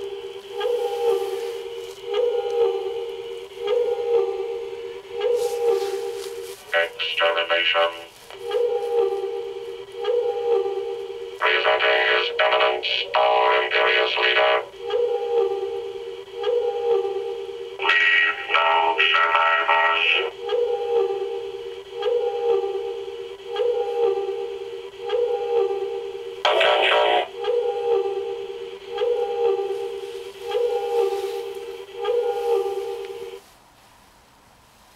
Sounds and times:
Inside, small room: 0:00.0 - 0:34.9.

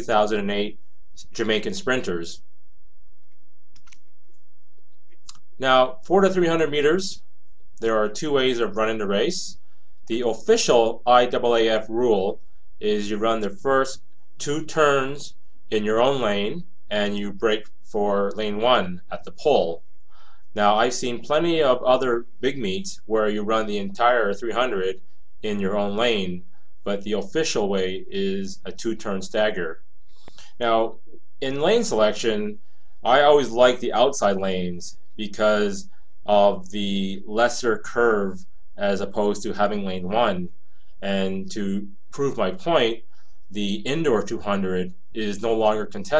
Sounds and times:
Speech: 0:00.0 - 0:02.4, 0:05.6 - 0:07.2, 0:07.8 - 0:19.8, 0:20.6 - 0:29.8, 0:30.6 - 0:46.1.

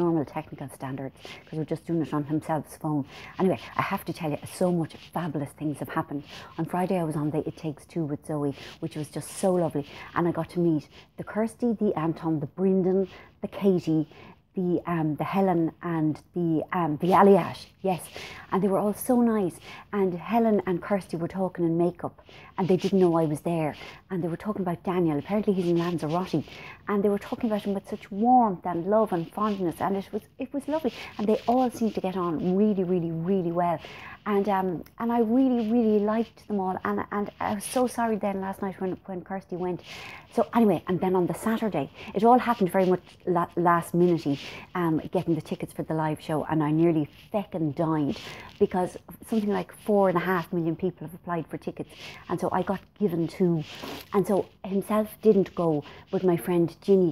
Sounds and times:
Speech: 0:00.0 - 0:57.1
Writing: 0:01.2 - 0:10.8, 0:17.0 - 0:50.8, 0:51.7 - 0:57.1.

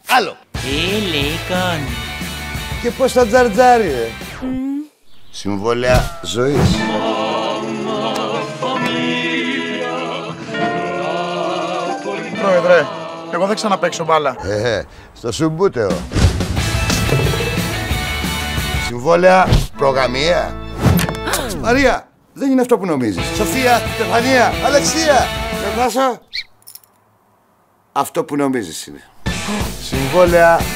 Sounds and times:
Music: 0:00.5 - 0:04.6, 0:05.9 - 0:14.4, 0:15.8 - 0:21.9, 0:23.2 - 0:25.9, 0:29.2 - 0:30.7.

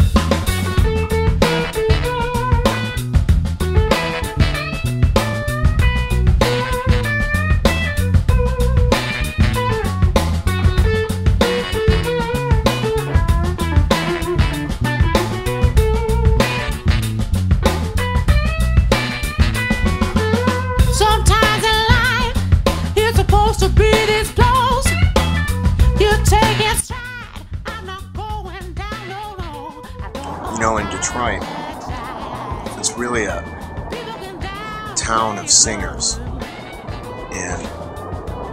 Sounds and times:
Music: 0:00.0 - 0:38.5.

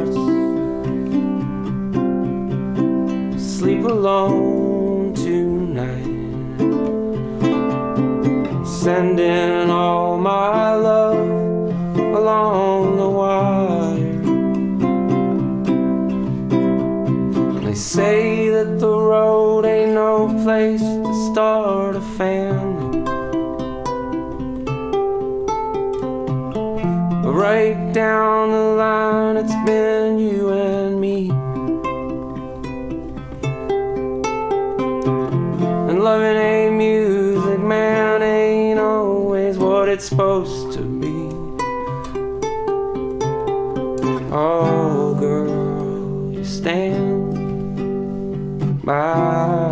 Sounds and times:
Flamenco: 0:00.0 - 0:09.9, 0:10.8 - 0:21.3, 0:22.1 - 0:49.7.

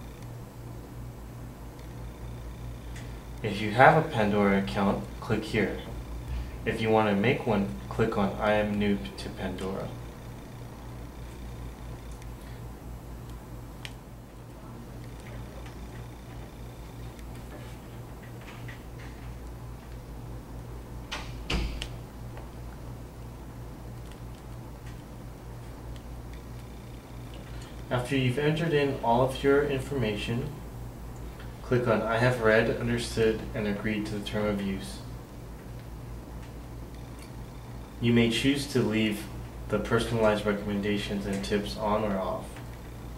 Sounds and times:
Speech: 0:03.4 - 0:06.0, 0:06.7 - 0:10.0, 0:27.9 - 0:30.7, 0:31.6 - 0:35.1, 0:38.0 - 0:42.7.

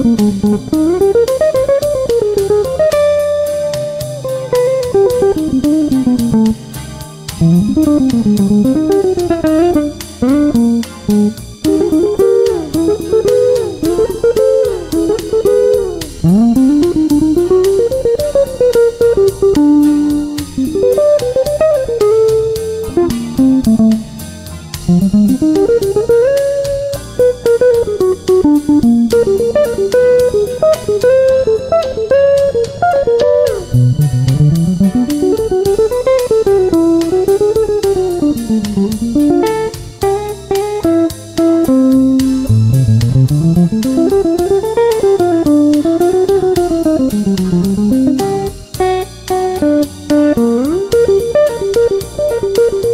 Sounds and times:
Guitar: 0:00.0 - 0:52.9.

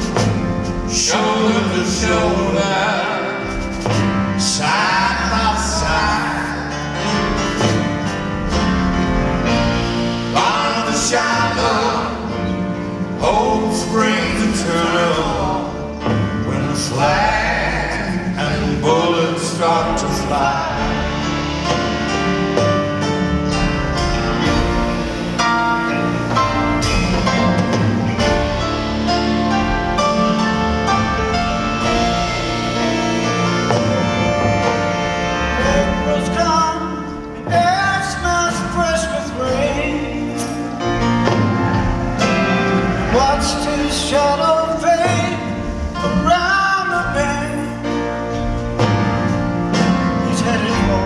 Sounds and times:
Music: 0:00.0 - 0:51.0.

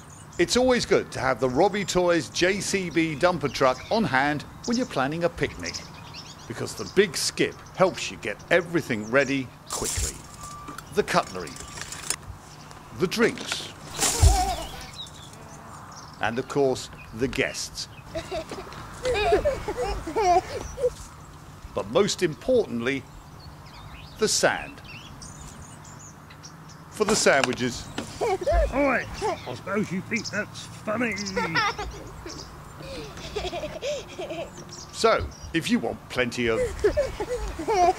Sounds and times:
Speech: 0:00.4 - 0:05.9, 0:06.5 - 0:10.2, 0:10.9 - 0:11.6, 0:13.0 - 0:13.7, 0:16.2 - 0:17.9, 0:21.8 - 0:23.0, 0:24.2 - 0:24.8, 0:27.0 - 0:27.9, 0:28.7 - 0:31.7, 0:35.0 - 0:36.7.

